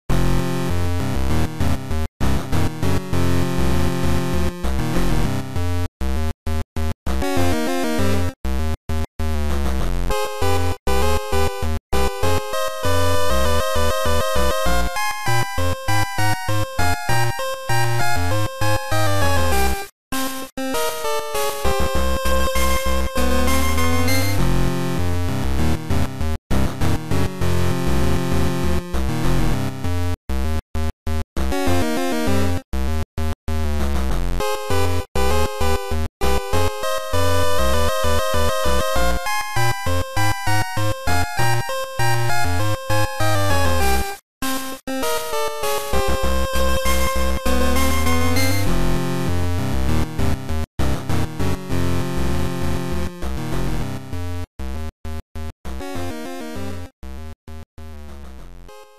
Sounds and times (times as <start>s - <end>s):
Rhythm and blues: 20.4s - 25.9s, 32.9s - 48.7s.